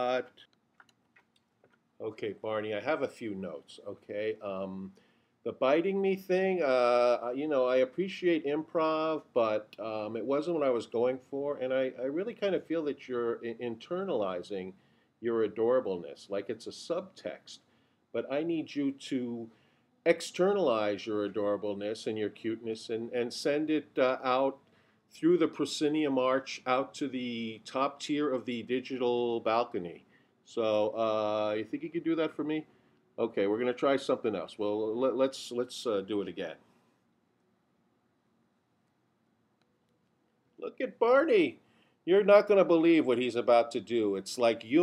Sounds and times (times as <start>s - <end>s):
Speech: 0.0s - 0.4s, 2.0s - 19.5s, 20.1s - 36.6s, 40.6s - 44.8s.